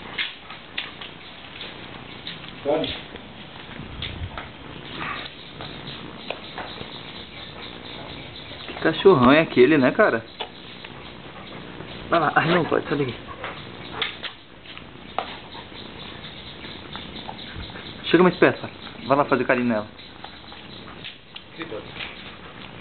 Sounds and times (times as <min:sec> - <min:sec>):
Dog: 0:04.9 - 0:08.9, 0:10.4 - 0:19.0, 0:20.0 - 0:22.8.